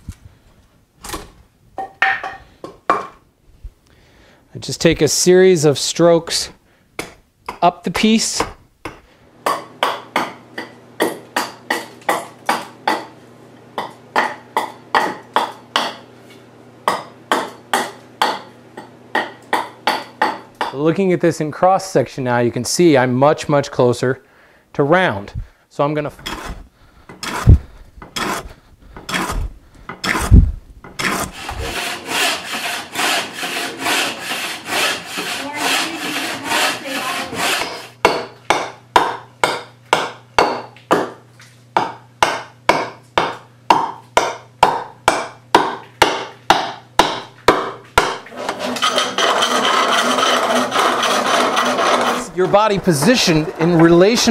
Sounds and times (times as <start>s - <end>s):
Speech: 4.5s - 6.6s, 7.6s - 8.6s, 20.7s - 24.2s, 24.8s - 26.2s, 35.3s - 37.4s, 52.1s - 54.3s
Wood: 26.2s - 37.9s, 48.0s - 54.3s.